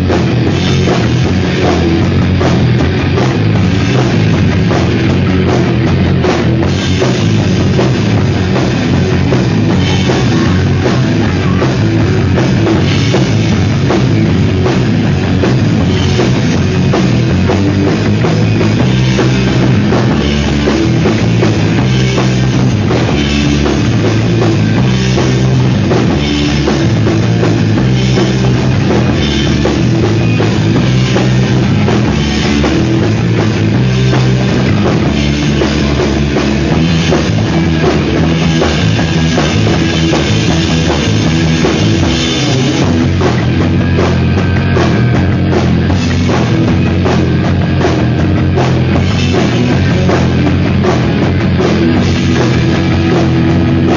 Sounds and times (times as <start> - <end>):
Rock music: 0.0 - 53.9.